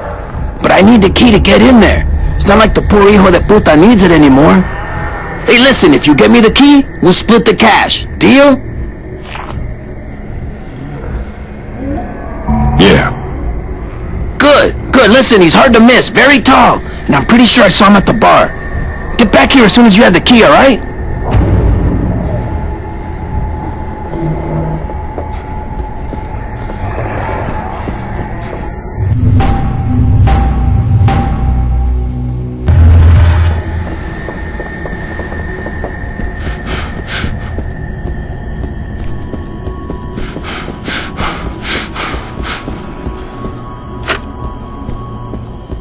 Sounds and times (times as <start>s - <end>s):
Music: 0.0s - 45.8s.